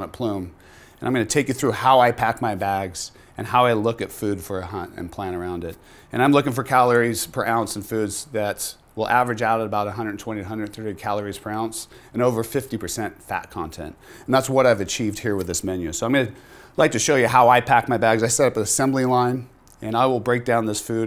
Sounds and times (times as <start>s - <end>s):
Speech: 0.0s - 21.0s.